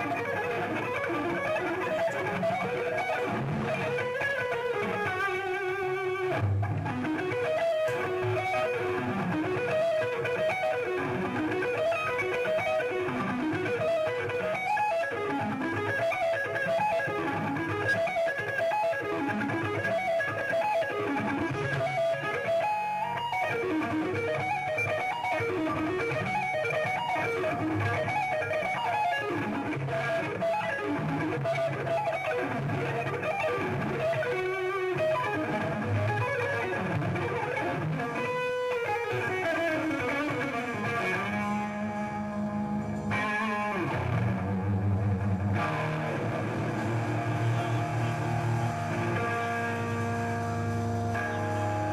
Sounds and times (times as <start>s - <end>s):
Bass guitar: 0.0s - 20.1s, 23.5s - 51.9s.